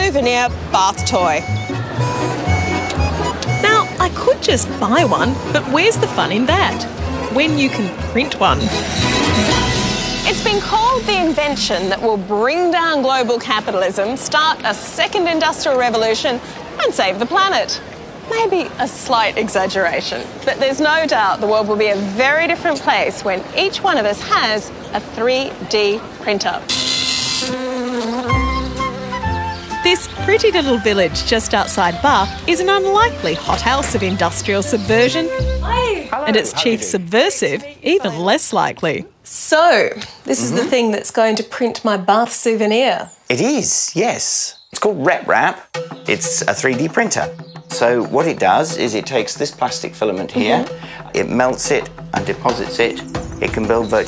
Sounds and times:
Music: 0.0 - 12.8, 26.7 - 36.9, 45.1 - 54.0.

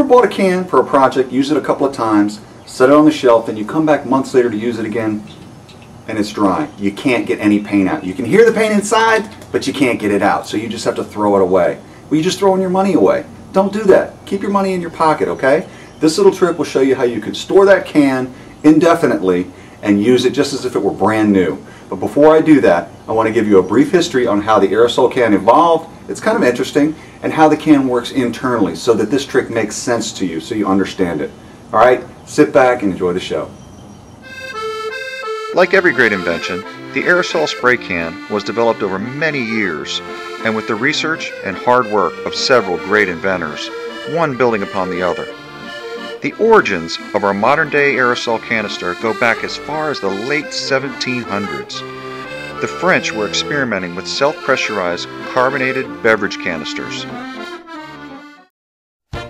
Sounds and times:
Speech: 0.0 - 5.4, 6.1 - 33.6, 35.6 - 45.3, 46.2 - 51.8, 52.6 - 57.2.

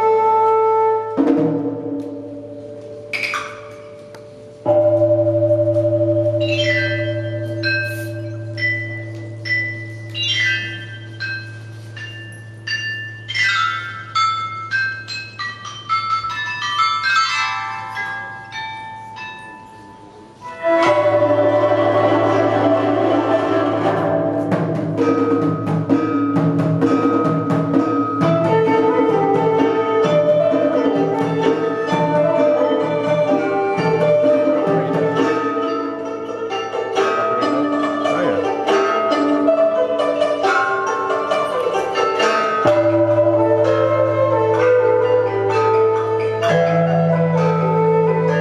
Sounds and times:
Traditional music: 0.0 - 48.4.

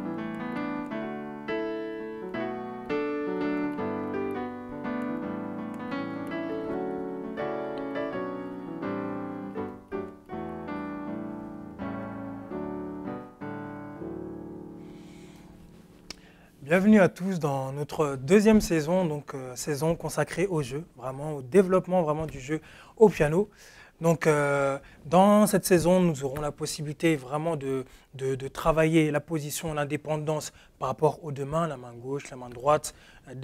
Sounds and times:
Speech: 16.6 - 33.4.

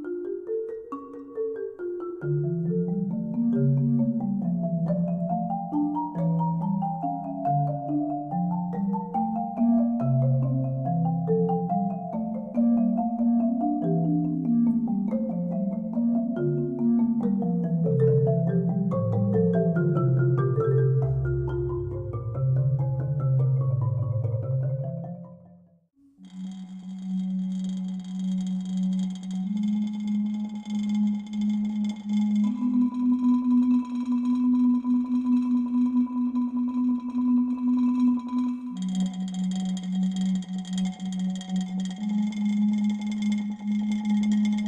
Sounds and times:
Marimba, xylophone: 0.0 - 25.7, 26.3 - 44.6.

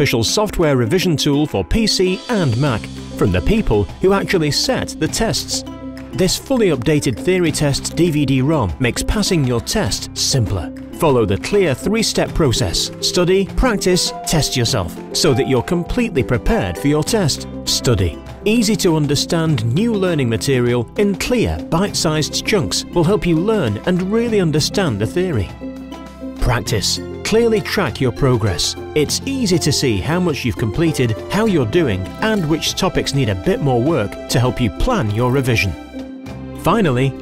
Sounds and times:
Speech: 0.0 - 25.6, 26.4 - 35.8, 36.6 - 37.2
Music: 0.0 - 37.2.

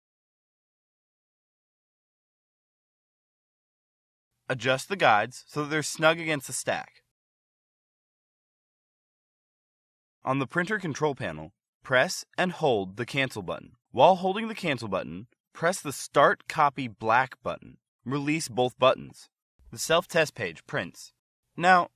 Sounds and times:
Speech: 4.5 - 7.1, 10.3 - 21.9.

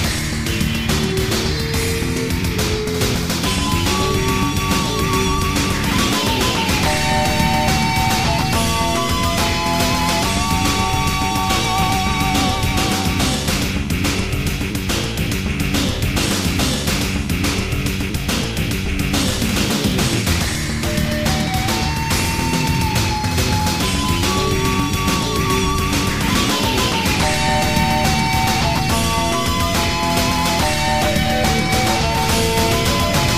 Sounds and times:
Music: 0.0 - 33.3.

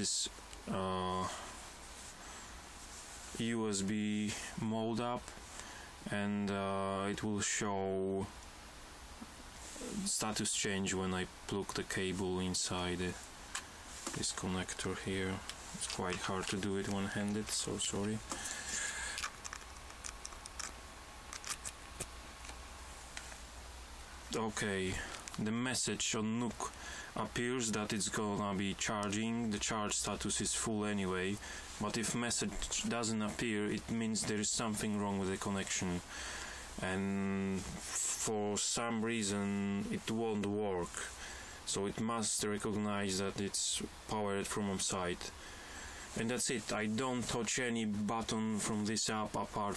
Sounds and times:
Speech: 0.0 - 1.5, 3.3 - 5.4, 6.0 - 8.4, 9.8 - 13.2, 14.1 - 18.4, 24.3 - 36.1, 36.8 - 45.4, 46.2 - 49.7.

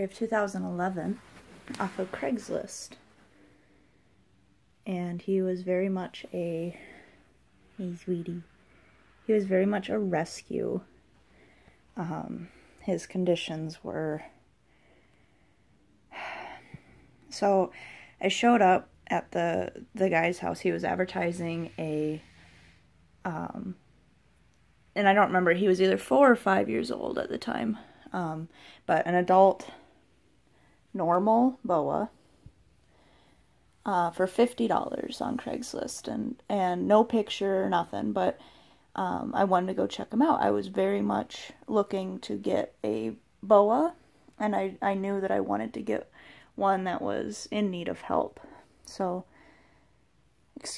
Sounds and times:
Speech: 0.0 - 3.0, 4.8 - 7.0, 7.7 - 8.5, 9.3 - 10.9, 12.0 - 14.4, 17.3 - 22.3, 23.2 - 23.8, 25.0 - 29.9, 30.9 - 32.1, 33.8 - 38.4, 39.0 - 49.3.

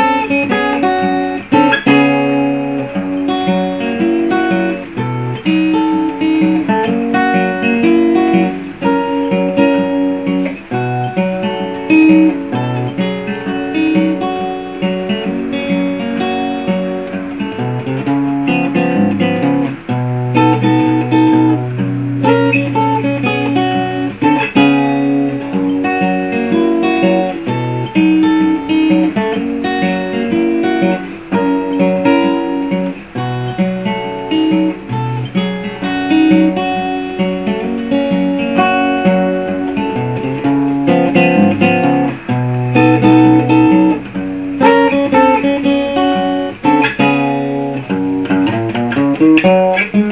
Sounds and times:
Blues: 0.0 - 50.1
Electric guitar: 0.0 - 50.1.

